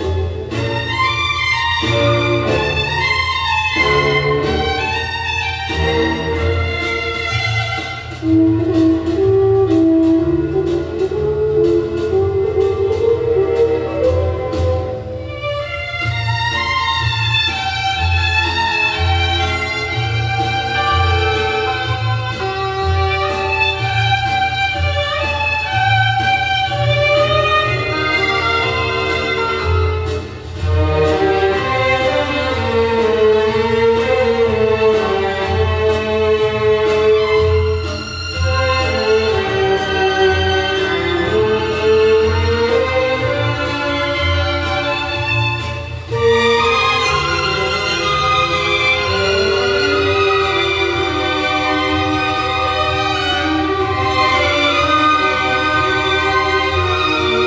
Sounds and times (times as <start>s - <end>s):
Background music: 0.0s - 57.4s
Tender music: 0.0s - 57.4s.